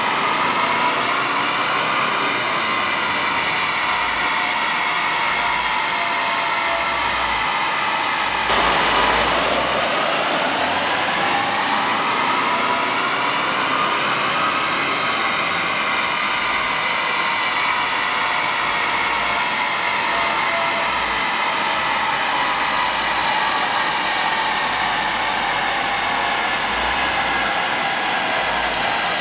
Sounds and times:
Car: 0.0s - 6.1s, 6.7s - 29.2s
Medium engine (mid frequency): 0.0s - 29.2s.

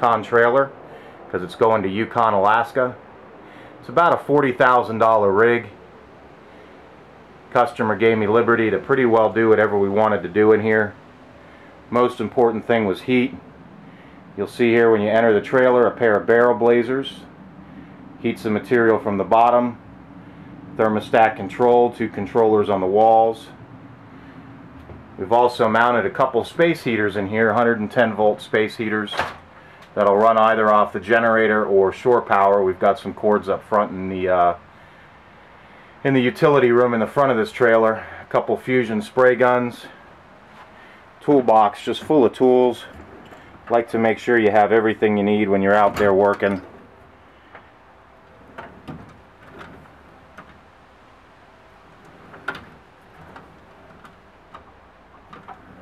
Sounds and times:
Speech: 0.0s - 3.0s, 3.8s - 5.8s, 7.5s - 11.0s, 11.9s - 13.4s, 14.4s - 17.3s, 18.2s - 19.8s, 20.8s - 23.6s, 25.2s - 29.4s, 30.0s - 34.6s, 36.0s - 40.0s, 41.2s - 43.0s, 43.7s - 46.7s.

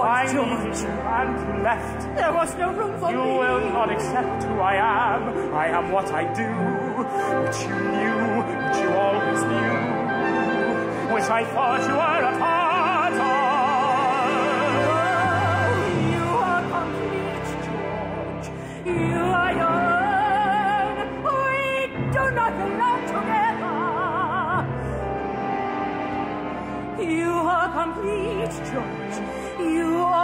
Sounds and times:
Opera: 0.0s - 30.2s
Orchestra: 0.0s - 30.2s.

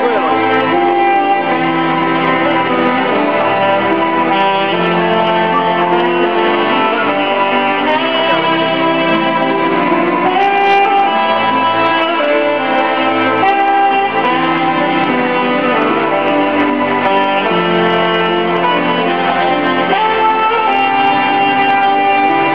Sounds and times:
Theme music: 0.0s - 22.5s.

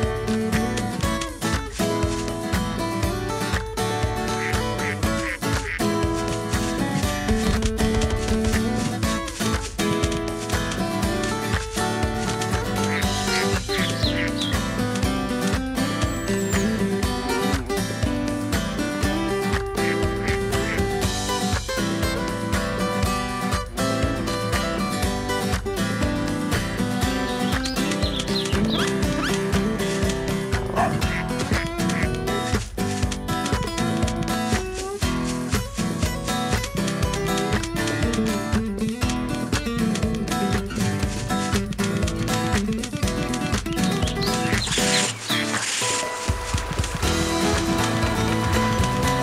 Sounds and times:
Music: 0.0s - 49.2s.

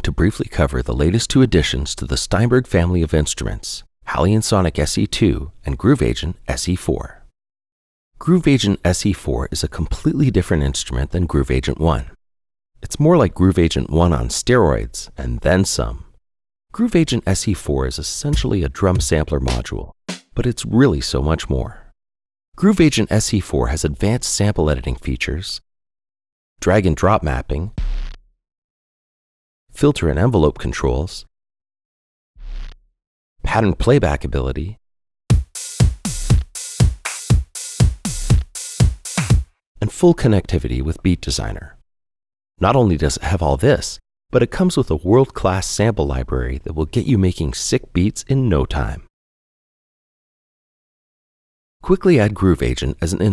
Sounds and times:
Speech: 0.0s - 7.3s, 8.2s - 12.2s, 12.8s - 16.1s, 16.7s - 21.9s, 22.6s - 25.6s, 26.6s - 27.8s, 29.8s - 31.3s, 33.4s - 34.8s, 39.8s - 41.8s, 42.6s - 49.1s, 51.8s - 53.3s.

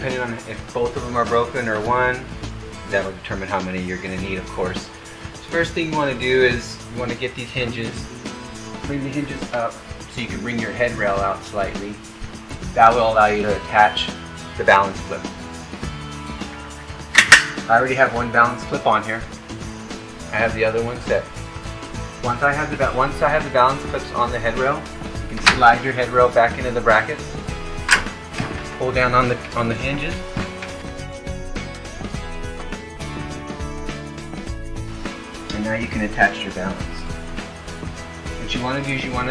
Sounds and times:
Speech: 0.0s - 8.1s, 8.8s - 12.0s, 12.7s - 15.3s, 17.7s - 19.3s, 20.3s - 21.3s, 22.2s - 27.3s, 28.7s - 30.3s, 35.5s - 37.2s, 38.4s - 39.3s
Music: 0.0s - 39.3s.

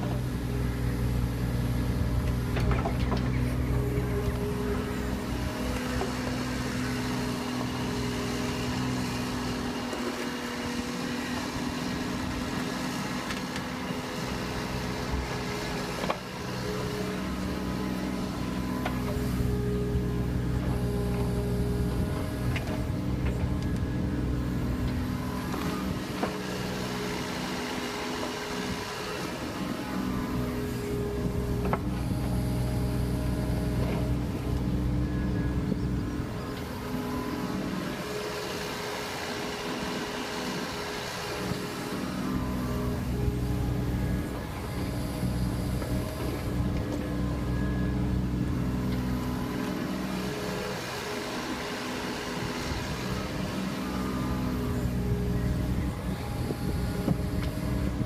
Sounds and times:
Vehicle: 0.0s - 58.0s.

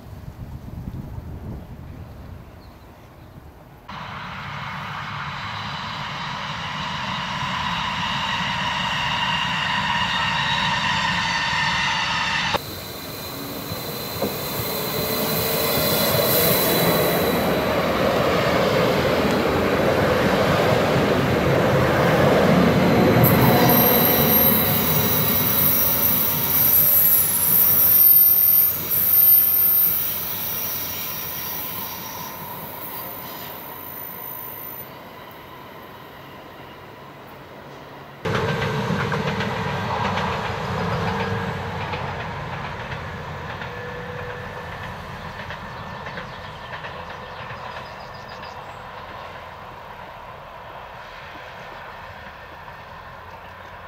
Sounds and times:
Railroad car, train wagon: 0.0s - 53.8s
Train: 0.0s - 53.8s.

